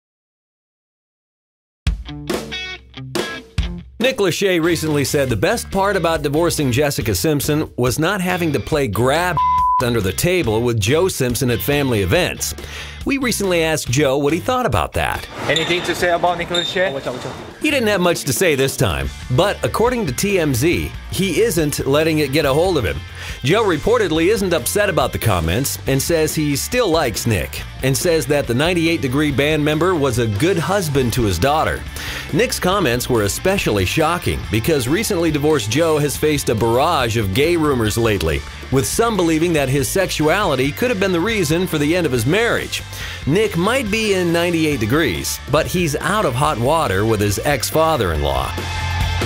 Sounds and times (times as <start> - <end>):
Music: 1.8 - 49.2
Speech: 4.0 - 48.6.